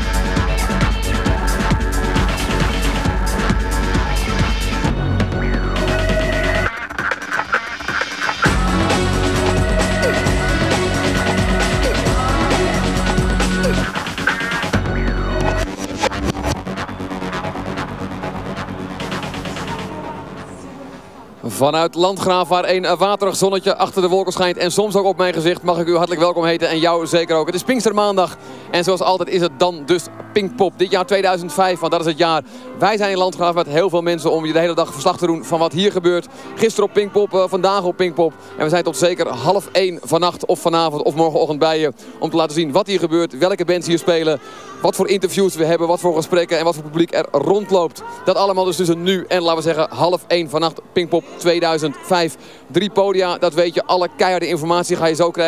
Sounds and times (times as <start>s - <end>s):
Speech: 21.4s - 55.4s.